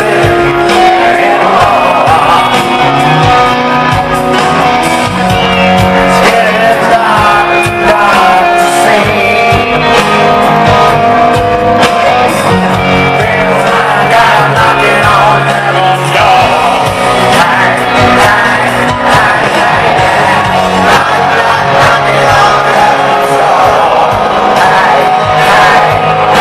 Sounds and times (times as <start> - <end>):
Music: 0.0 - 26.4.